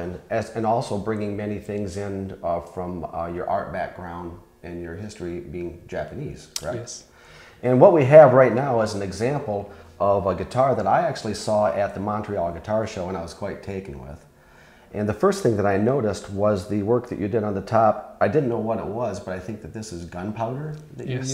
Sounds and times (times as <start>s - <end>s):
Speech: 0.0s - 14.3s, 14.9s - 21.3s.